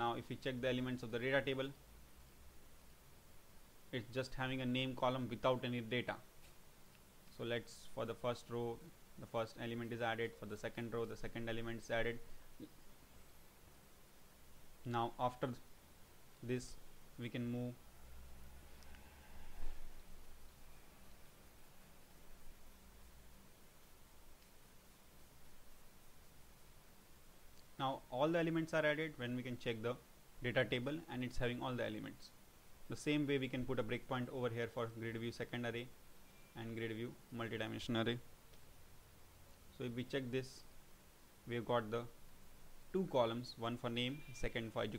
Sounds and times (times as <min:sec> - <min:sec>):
Speech: 0:00.0 - 0:01.8, 0:03.9 - 0:06.3, 0:07.3 - 0:12.2, 0:14.9 - 0:15.6, 0:16.4 - 0:17.8, 0:27.8 - 0:35.9, 0:36.6 - 0:38.3, 0:39.8 - 0:40.7, 0:41.5 - 0:42.2, 0:42.9 - 0:44.9
Silence: 0:05.8 - 0:28.4, 0:35.8 - 0:37.4.